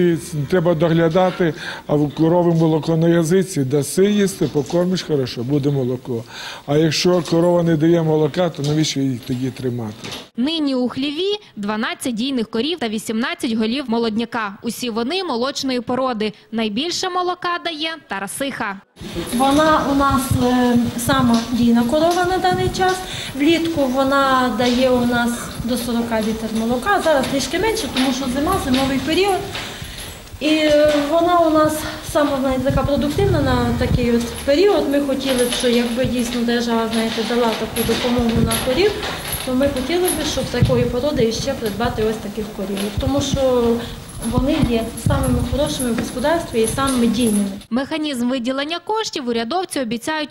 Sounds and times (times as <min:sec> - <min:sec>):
Speech: 0:00.0 - 0:29.6, 0:30.4 - 0:50.3.